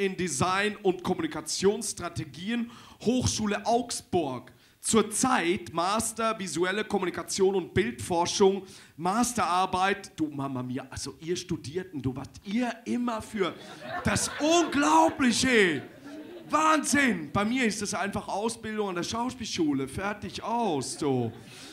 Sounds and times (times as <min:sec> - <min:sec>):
Speech: 0:00.0 - 0:15.9, 0:16.5 - 0:21.4.